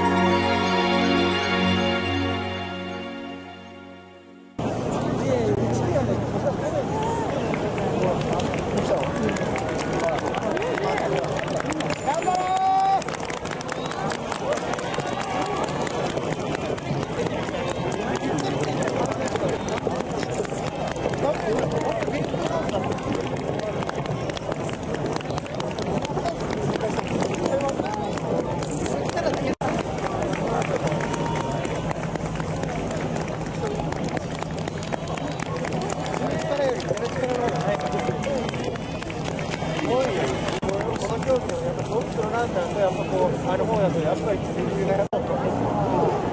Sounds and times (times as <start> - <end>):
Speech: 4.6 - 46.3.